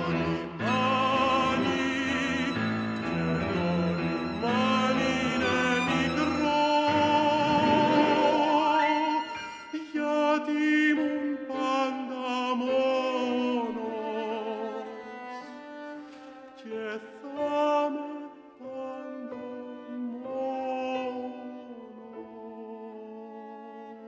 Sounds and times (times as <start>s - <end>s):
Bowed string instrument: 0.0s - 24.0s
Opera: 0.0s - 24.0s.